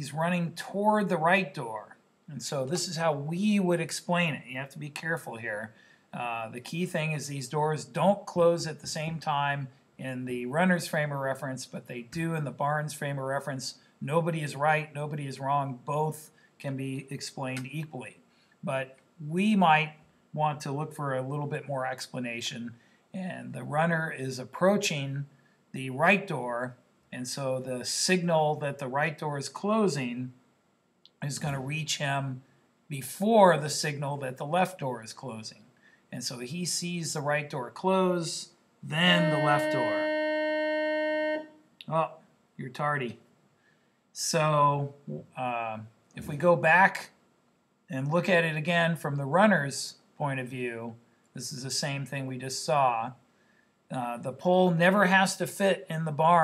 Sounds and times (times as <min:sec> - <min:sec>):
Speech: 0:00.0 - 0:30.4, 0:31.2 - 0:43.2, 0:44.2 - 0:47.2, 0:47.9 - 0:53.2, 0:53.9 - 0:56.4
Inside, small room: 0:00.0 - 0:56.4.